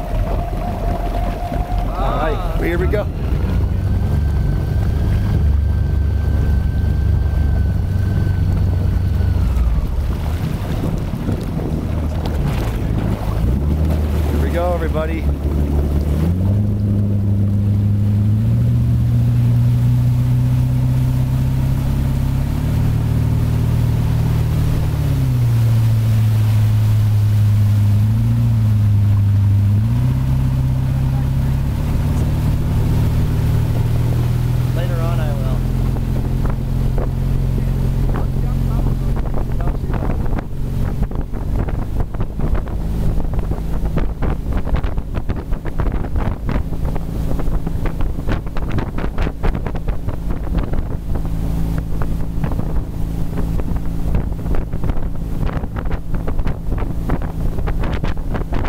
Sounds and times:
Motorboat, speedboat: 0:00.0 - 0:58.6.

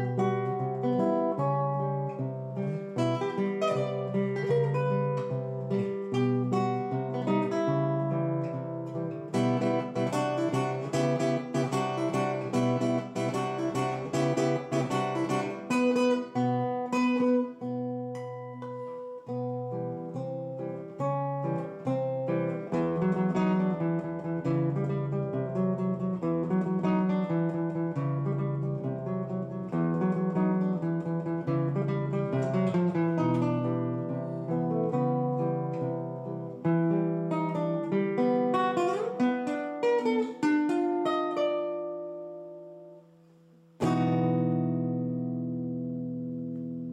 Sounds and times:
Acoustic guitar: 0:00.0 - 0:46.9.

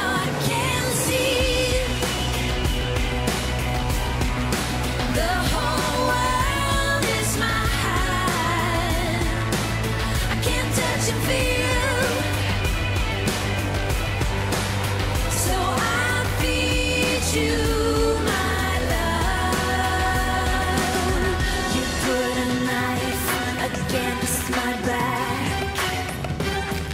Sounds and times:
Singing: 0:00.0 - 0:02.4, 0:05.1 - 0:12.8, 0:15.3 - 0:26.0.

